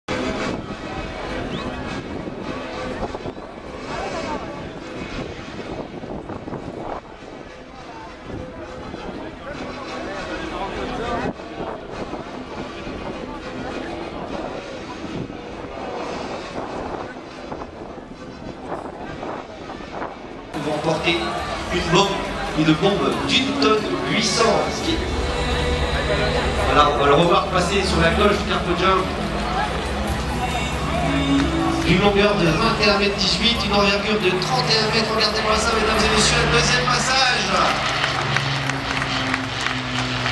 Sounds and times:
Music: 0.1s - 40.3s
Speech: 7.6s - 15.2s, 20.6s - 37.9s.

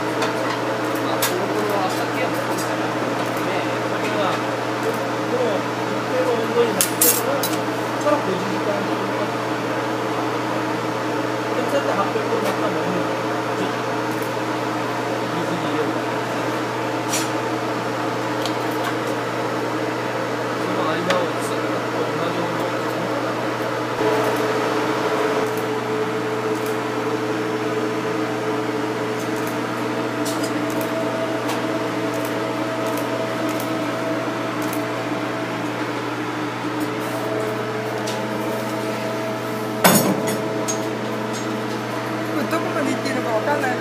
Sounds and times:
Speech: 1.0s - 9.4s, 11.5s - 13.9s, 15.2s - 16.1s, 20.6s - 23.3s, 42.3s - 43.8s.

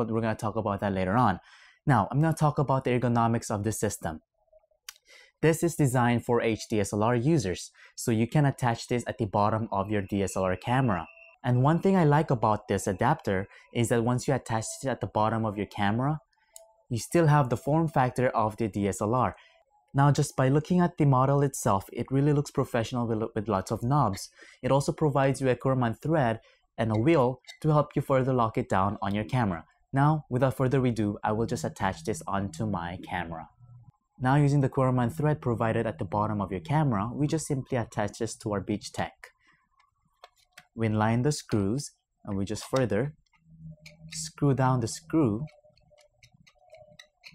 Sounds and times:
Narration, monologue: 0.0s - 47.3s.

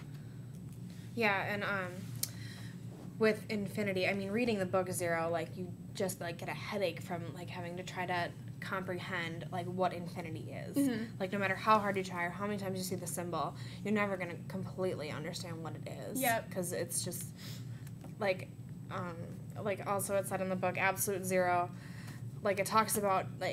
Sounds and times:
Inside, small room: 0.0s - 23.5s
Speech: 3.2s - 17.3s.

